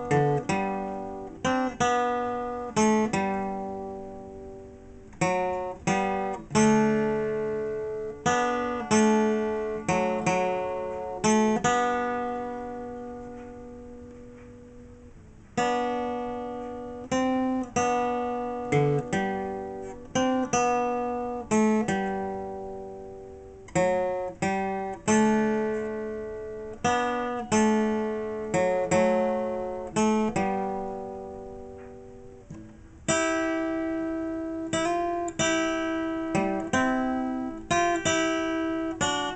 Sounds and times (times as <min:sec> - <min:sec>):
Strum: 0:00.0 - 0:39.3.